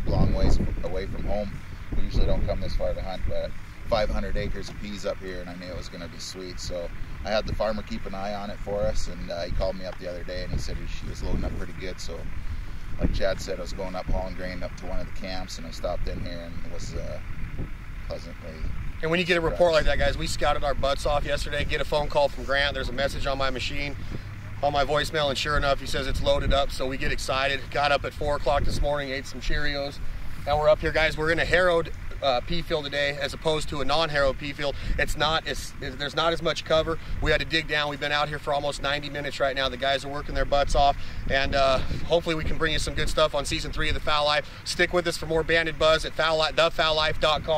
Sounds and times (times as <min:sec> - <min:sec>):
Speech: 0:00.0 - 0:12.3, 0:13.0 - 0:17.2, 0:18.1 - 0:24.0, 0:24.6 - 0:47.5.